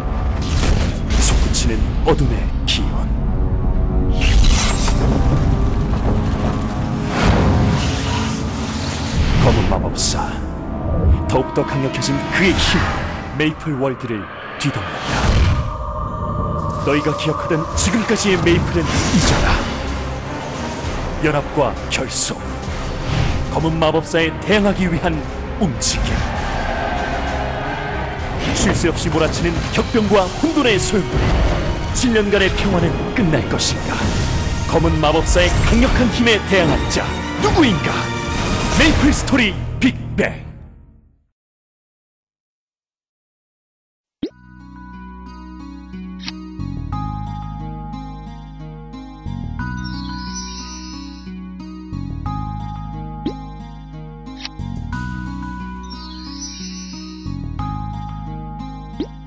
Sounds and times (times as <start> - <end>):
Music: 0.0 - 41.4, 44.2 - 59.2
Speech: 1.2 - 3.1, 9.4 - 10.5, 11.3 - 14.9, 16.9 - 19.7, 21.2 - 22.4, 23.5 - 26.2, 28.6 - 31.2, 32.0 - 34.1, 34.7 - 38.1, 38.8 - 40.6.